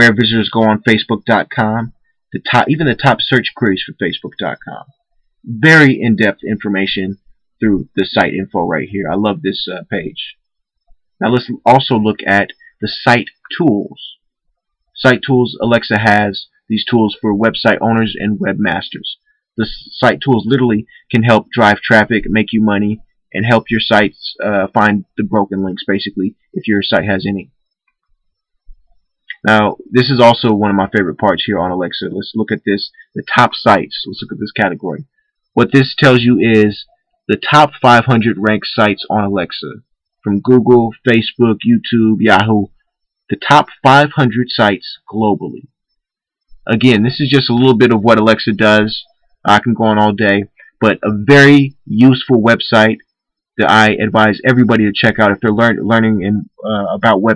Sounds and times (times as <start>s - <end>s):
Narration, monologue: 0.0s - 57.3s.